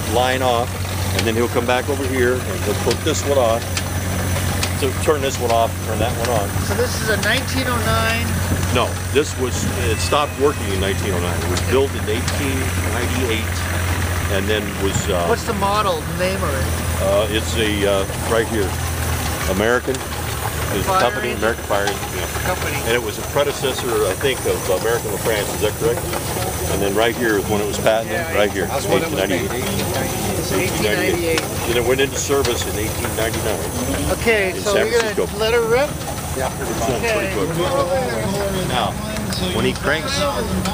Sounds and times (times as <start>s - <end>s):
Speech: 0.0s - 3.7s, 4.7s - 13.7s, 14.3s - 18.8s, 20.7s - 26.1s, 26.7s - 40.7s.